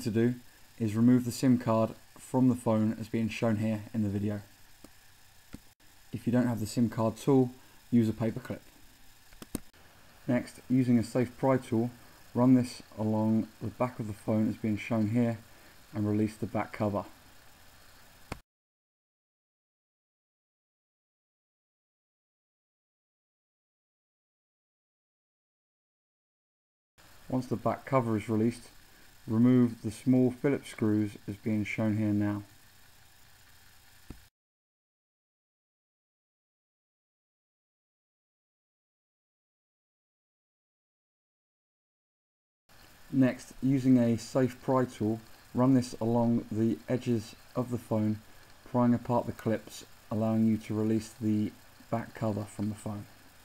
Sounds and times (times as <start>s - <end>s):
Speech: 0.0s - 4.5s, 6.1s - 8.7s, 10.3s - 17.2s, 27.3s - 32.5s, 43.1s - 53.1s.